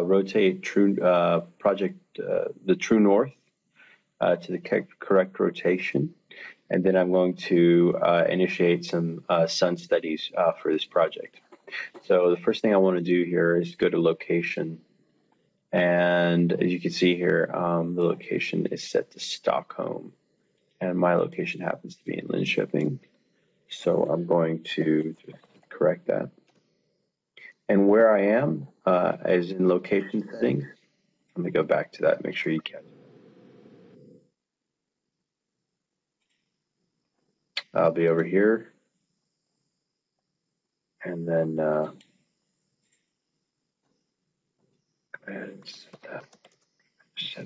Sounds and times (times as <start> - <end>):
Speech: 0.0 - 3.3, 4.2 - 14.8, 15.8 - 20.1, 20.8 - 23.0, 23.7 - 26.3, 27.4 - 30.8, 31.4 - 32.9, 37.6 - 38.6, 41.0 - 42.0, 45.2 - 46.4, 47.2 - 47.4.